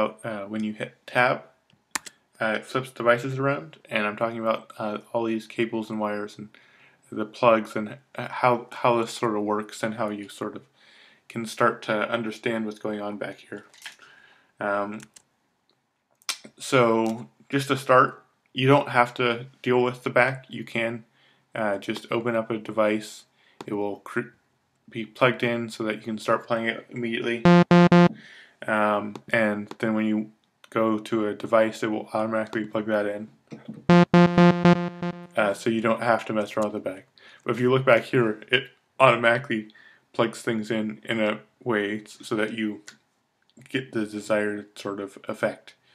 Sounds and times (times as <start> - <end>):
Speech: 0.0 - 1.5, 2.4 - 10.7, 11.3 - 13.7, 14.6 - 15.1, 16.4 - 27.4, 28.6 - 33.8, 35.3 - 43.0, 43.6 - 45.8.